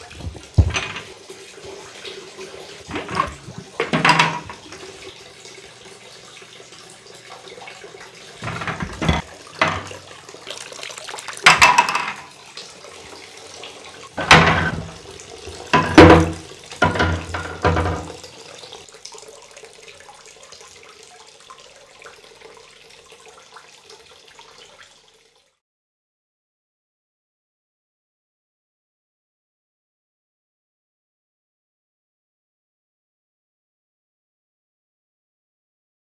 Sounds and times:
Bathtub (filling or washing): 0.0s - 25.6s
Water: 0.0s - 25.6s
Water tap, faucet: 0.0s - 25.6s.

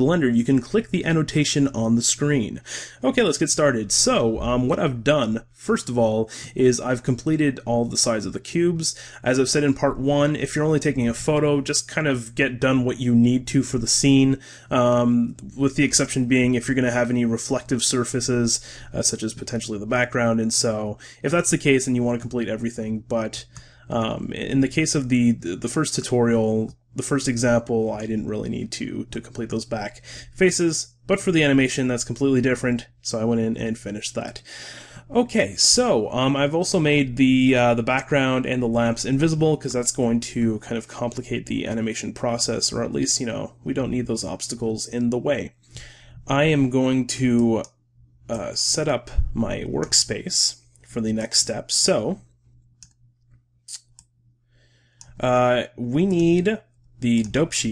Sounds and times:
Speech: 0.0s - 45.6s, 46.2s - 47.7s, 48.3s - 52.3s, 55.1s - 57.7s.

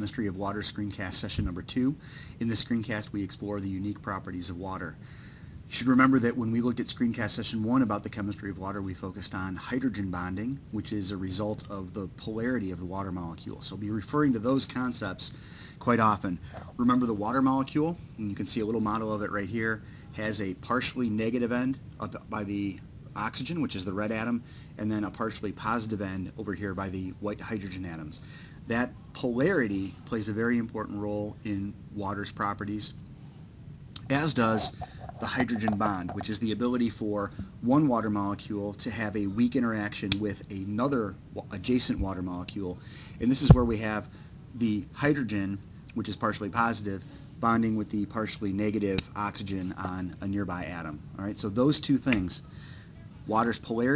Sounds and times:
Speech: 0.0s - 5.0s, 5.7s - 33.0s, 34.0s - 53.9s.

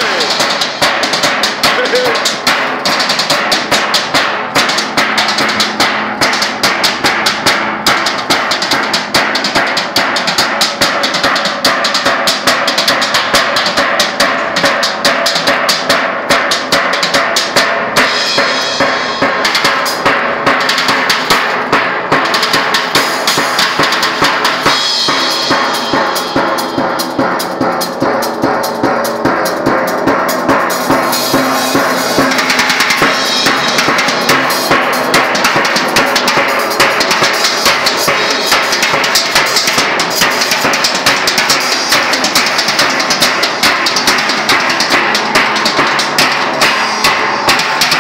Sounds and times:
Bass drum: 0.0s - 48.0s
Drum kit: 0.0s - 48.0s.

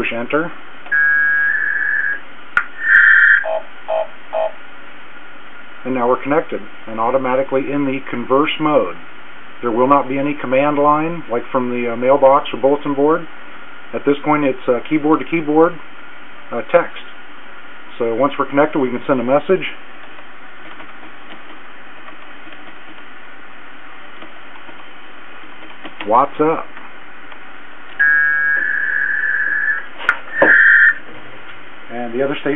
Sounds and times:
Speech: 0.0s - 0.6s, 5.8s - 9.0s, 9.6s - 13.3s, 13.9s - 15.8s, 16.5s - 17.1s, 17.9s - 19.8s, 26.0s - 26.7s, 31.9s - 32.5s.

